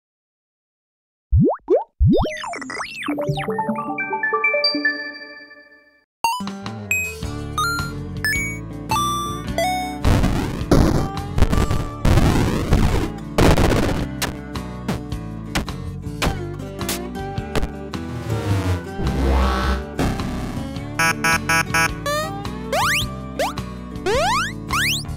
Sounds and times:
Plop: 0:01.4 - 0:02.3
Sound effect: 0:01.4 - 0:14.1, 0:18.1 - 0:20.4, 0:21.0 - 0:25.1
Music: 0:03.1 - 0:25.1.

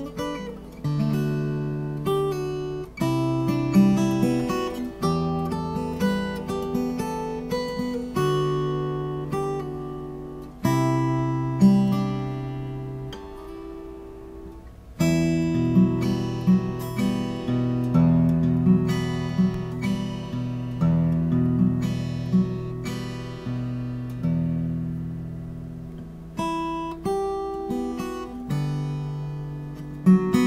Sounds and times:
Strum: 0:00.0 - 0:30.4.

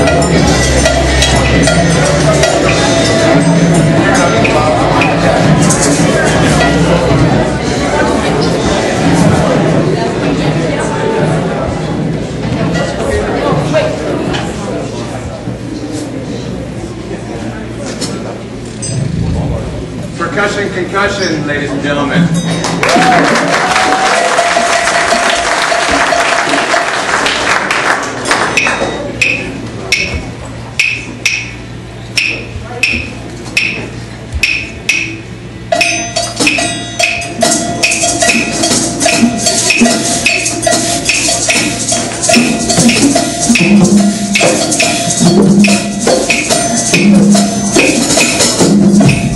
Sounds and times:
Percussion: 0:00.0 - 0:10.5, 0:18.0 - 0:20.2, 0:21.0 - 0:49.3.

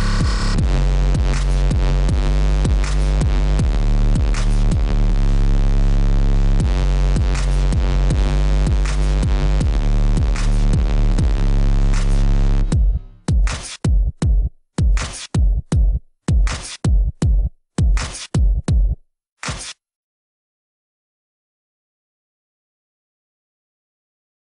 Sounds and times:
Dubstep: 0:00.0 - 0:13.8, 0:19.4 - 0:19.8.

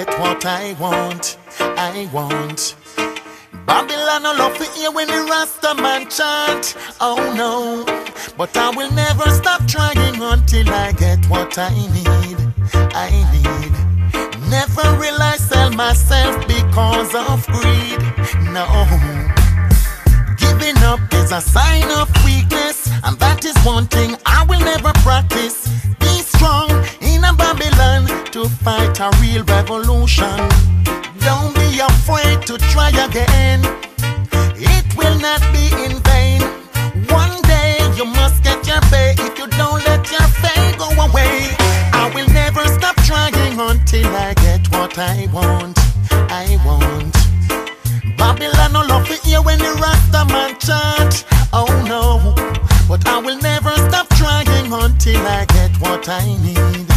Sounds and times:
Music: 0:00.0 - 0:56.9.

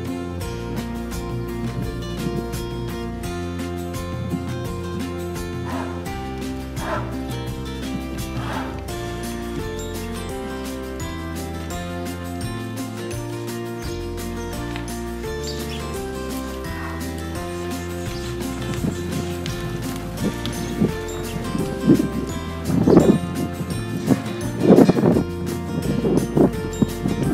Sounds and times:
Music: 0:00.0 - 0:27.3.

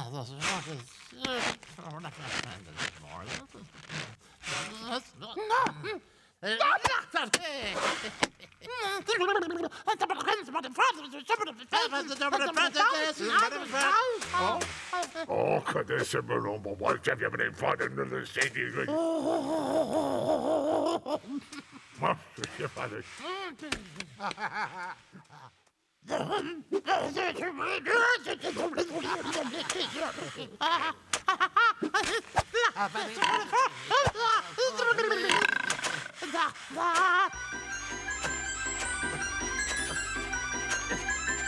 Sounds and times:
Speech: 0:00.0 - 0:04.0, 0:08.7 - 0:14.7, 0:15.3 - 0:19.2, 0:22.0 - 0:24.0, 0:26.1 - 0:29.3.

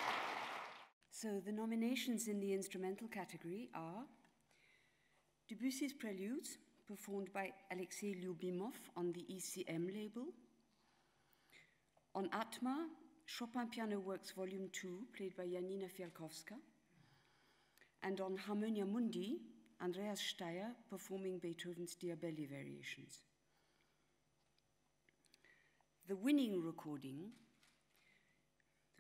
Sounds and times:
Speech: 0:01.1 - 0:04.2, 0:05.5 - 0:10.4, 0:12.2 - 0:16.7, 0:18.0 - 0:23.3, 0:26.1 - 0:27.4.

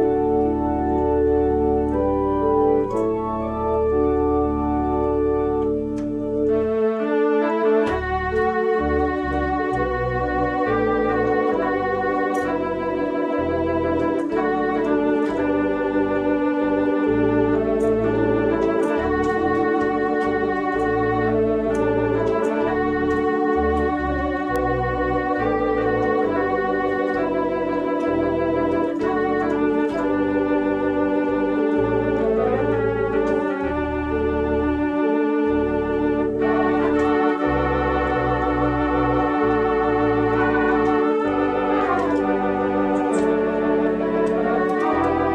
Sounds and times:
Classical music: 0:00.0 - 0:45.3
Organ: 0:00.0 - 0:45.3
Piano: 0:00.0 - 0:45.3.

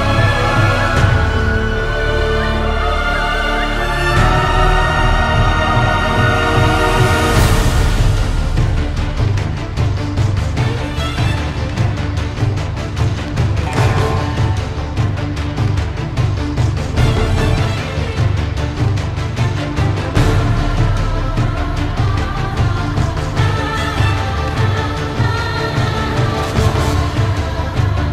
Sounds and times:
Music: 0:00.0 - 0:28.1.

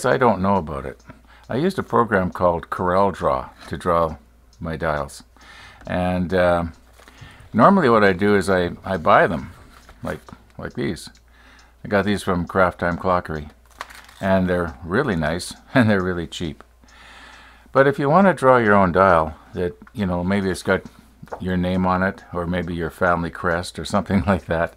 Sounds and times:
Speech: 0:00.0 - 0:05.3, 0:05.9 - 0:06.8, 0:07.5 - 0:11.2, 0:11.8 - 0:13.6, 0:14.2 - 0:16.6, 0:17.7 - 0:24.7
Tick: 0:14.6 - 0:17.0.

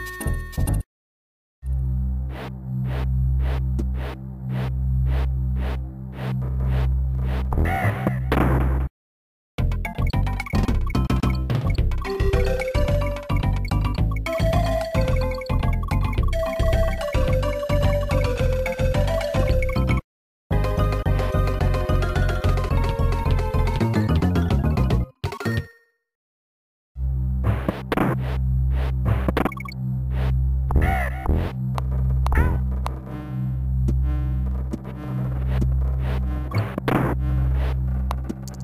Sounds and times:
Music: 0:00.0 - 0:00.9, 0:09.6 - 0:25.6.

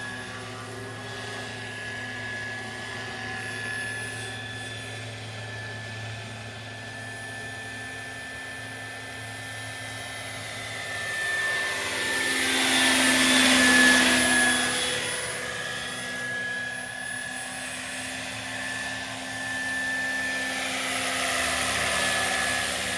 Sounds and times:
Helicopter: 0:00.0 - 0:22.9.

